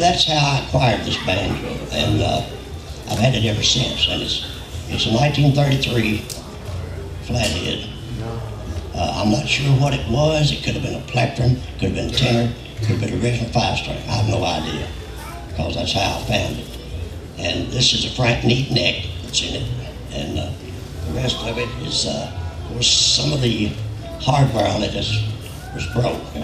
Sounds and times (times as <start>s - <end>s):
Male speech, man speaking: 0.0s - 6.4s, 7.2s - 16.8s, 17.4s - 26.4s.